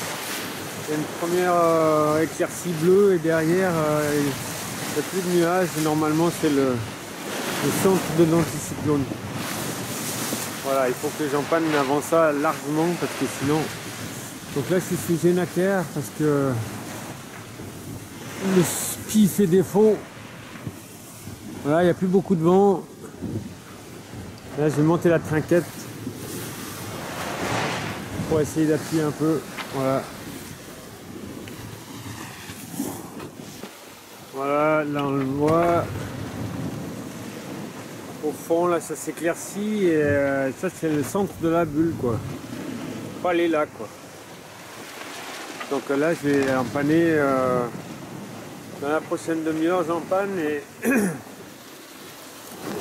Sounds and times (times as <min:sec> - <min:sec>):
Speech: 0:00.8 - 0:06.9, 0:07.6 - 0:09.2, 0:10.6 - 0:13.8, 0:14.5 - 0:16.7, 0:18.4 - 0:20.1, 0:21.6 - 0:22.9, 0:24.6 - 0:25.8, 0:28.2 - 0:30.1, 0:34.4 - 0:36.0, 0:38.2 - 0:42.3, 0:43.2 - 0:44.0, 0:45.7 - 0:47.8, 0:48.8 - 0:51.2.